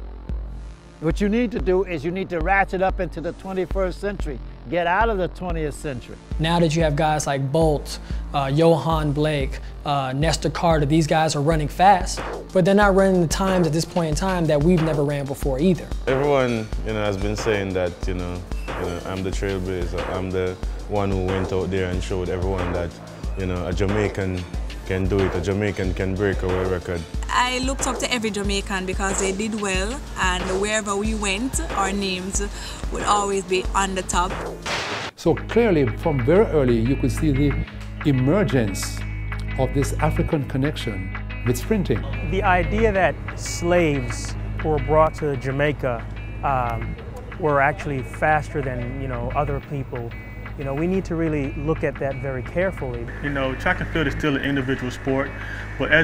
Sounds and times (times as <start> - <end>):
Music: 0.0 - 56.0
Speech: 1.0 - 34.3, 35.2 - 39.0, 39.6 - 56.0.